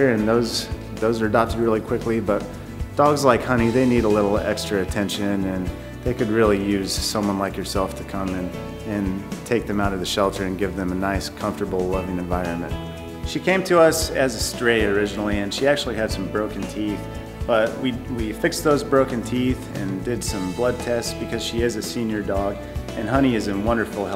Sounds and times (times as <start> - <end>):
Music: 0.0 - 24.1
Speech: 0.0 - 24.1.